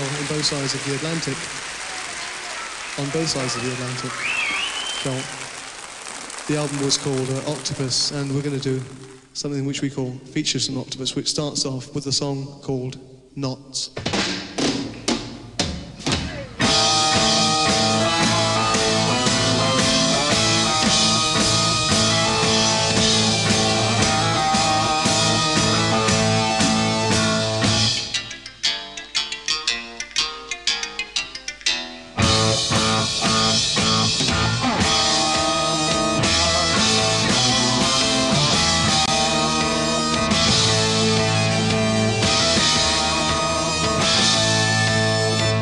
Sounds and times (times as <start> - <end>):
Speech: 0.0 - 1.4, 2.1 - 4.2, 5.0 - 5.3, 6.5 - 14.0
Music: 0.0 - 9.2, 14.0 - 45.6
Inside, large room or hall: 0.0 - 19.4.